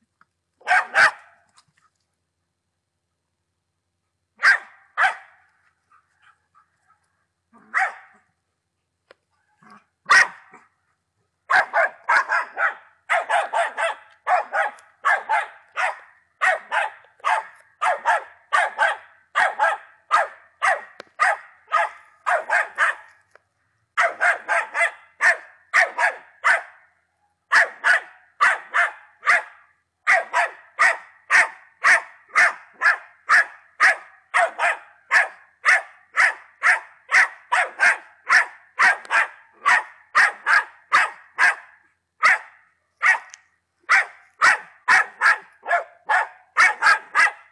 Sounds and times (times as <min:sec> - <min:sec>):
Dog: 0:00.6 - 0:02.0, 0:04.4 - 0:08.3, 0:09.4 - 0:10.7, 0:11.5 - 0:23.2, 0:24.0 - 0:26.8, 0:27.5 - 0:47.5.